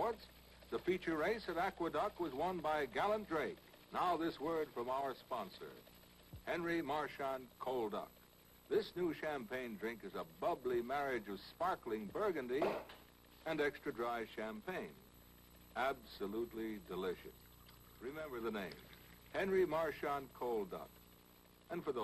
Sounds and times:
Speech: 0:00.0 - 0:05.8, 0:06.5 - 0:08.1, 0:08.7 - 0:12.7, 0:13.5 - 0:15.0, 0:15.8 - 0:17.3, 0:18.0 - 0:18.8, 0:19.4 - 0:20.9, 0:21.7 - 0:22.0.

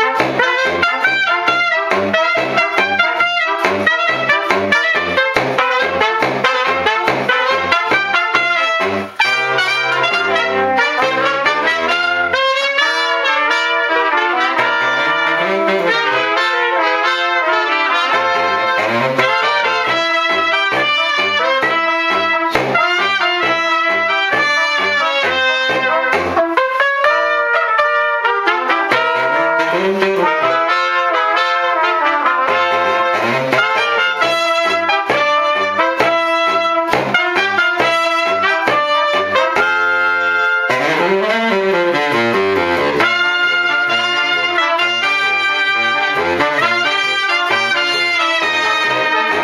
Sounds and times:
Trumpet: 0:00.0 - 0:49.4.

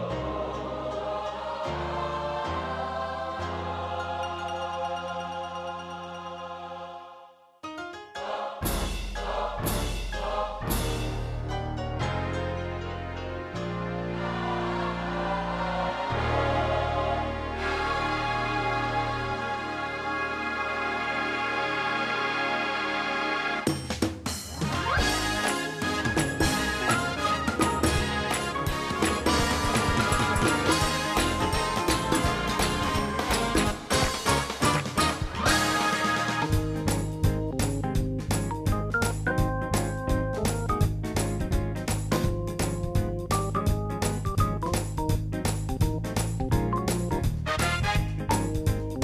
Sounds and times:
Piano: 0:00.0 - 0:49.0.

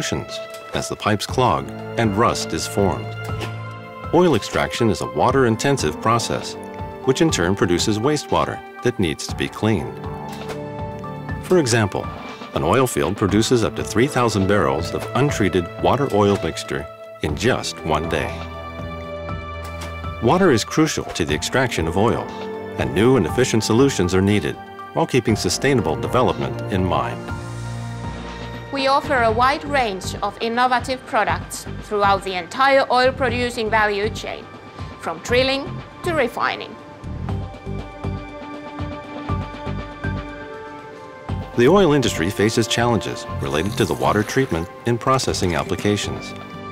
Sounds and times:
Speech: 0:00.0 - 0:03.1, 0:04.2 - 0:10.0, 0:11.5 - 0:18.4, 0:20.2 - 0:27.2, 0:28.8 - 0:34.4, 0:35.0 - 0:36.8, 0:41.6 - 0:46.4
Music: 0:00.0 - 0:46.7.

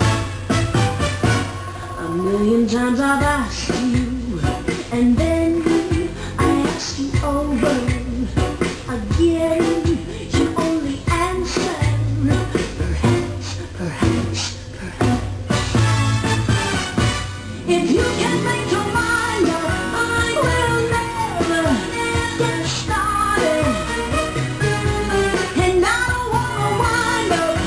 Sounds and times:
Music: 0:00.0 - 0:27.6.

